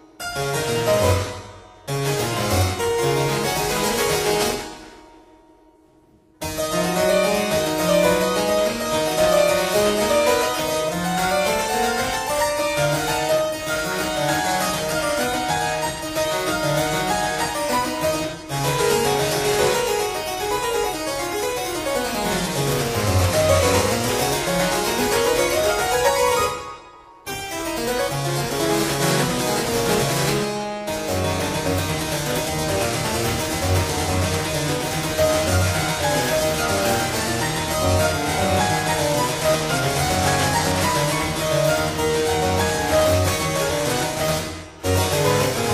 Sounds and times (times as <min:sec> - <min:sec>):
Harpsichord: 0:00.0 - 0:45.7.